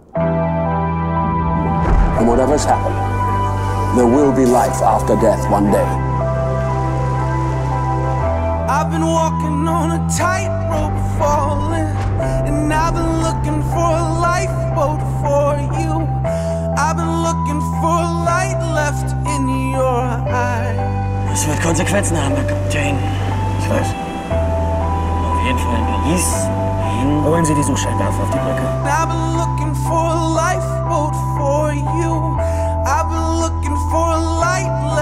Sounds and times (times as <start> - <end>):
Music: 0.0 - 35.0.